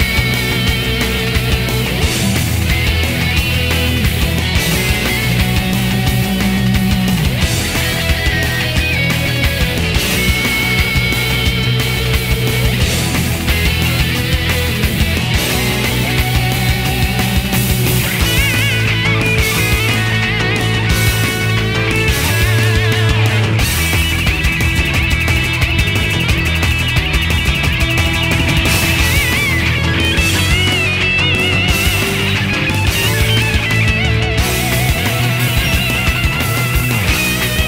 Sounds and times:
Guitar: 0:00.0 - 0:37.6.

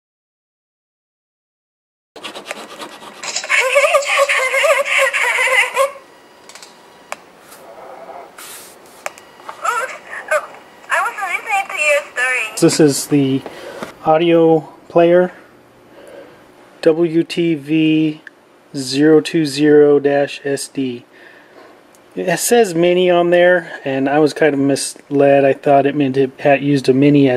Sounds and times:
Inside, small room: 0:02.2 - 0:27.3
Speech: 0:03.5 - 0:06.0, 0:09.7 - 0:13.4, 0:16.8 - 0:21.0, 0:22.2 - 0:27.3.

